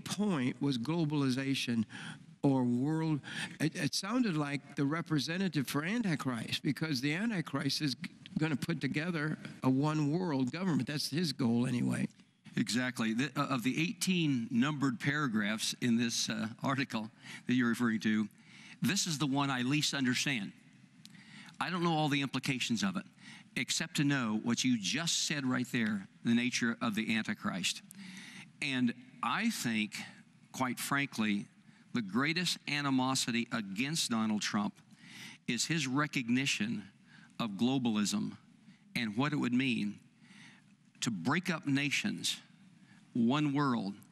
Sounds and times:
Speech: 0.0 - 20.6, 21.6 - 27.8, 28.6 - 34.8, 35.5 - 38.4, 39.0 - 40.0, 41.0 - 42.5, 43.2 - 44.1.

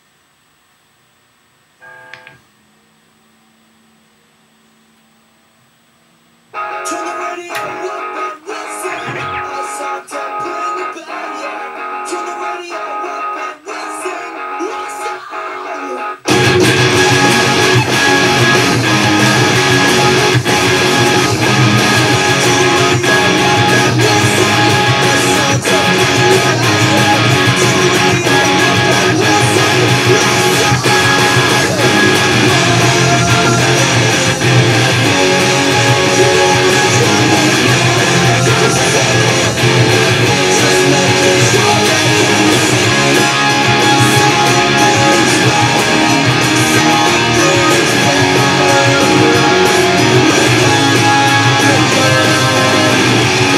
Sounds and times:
Music: 6.6 - 53.5.

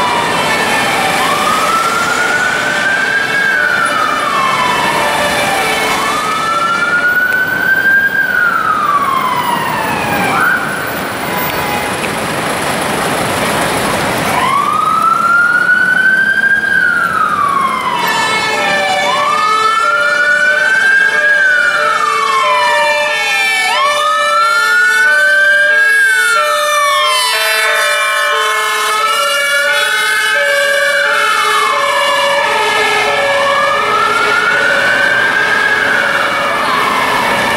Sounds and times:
Police car (siren): 0.0 - 12.0, 14.2 - 37.5
Ambulance (siren): 0.0 - 12.1, 14.2 - 37.5.

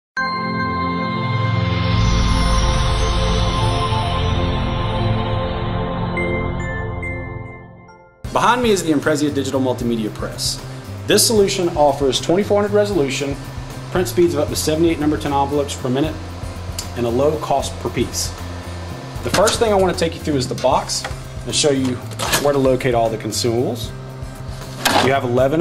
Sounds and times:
Music: 0.2 - 25.6
Speech: 8.3 - 16.2, 16.8 - 18.4, 19.2 - 23.9, 24.9 - 25.6.

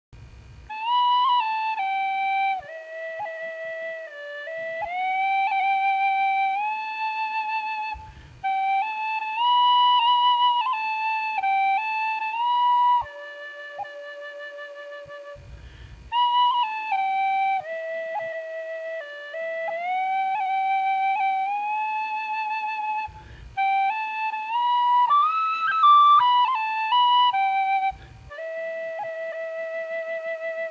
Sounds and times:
Flute: 0.6 - 30.7.

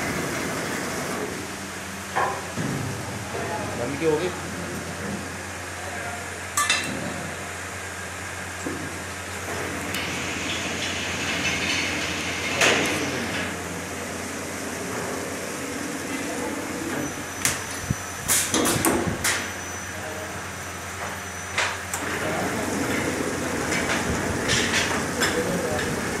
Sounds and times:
Speech: 3.3 - 4.4, 25.2 - 26.2.

